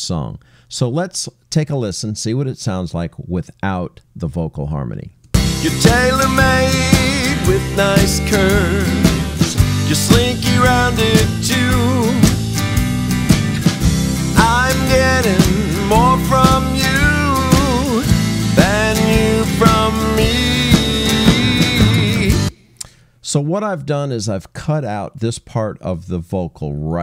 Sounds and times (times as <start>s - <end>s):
Speech: 0.0s - 5.2s, 23.2s - 27.0s
Vocal music: 5.4s - 23.0s.